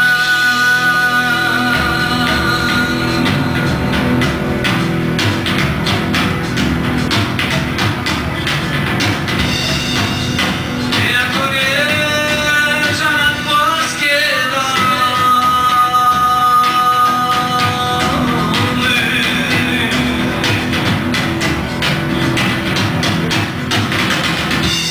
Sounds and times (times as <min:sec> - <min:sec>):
Music: 0:00.0 - 0:24.9.